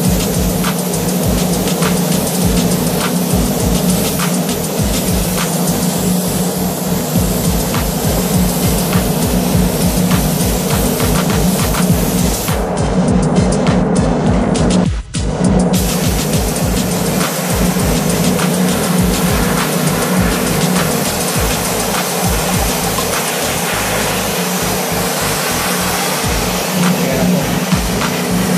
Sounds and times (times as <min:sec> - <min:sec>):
Spray: 0:00.0 - 0:14.8, 0:15.7 - 0:28.5
Music: 0:00.0 - 0:28.5.